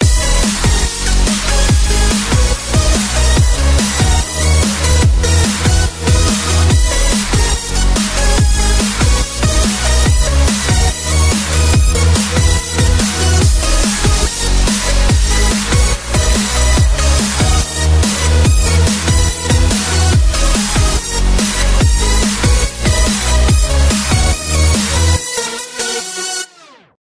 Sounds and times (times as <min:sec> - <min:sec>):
Music: 0:00.0 - 0:27.0.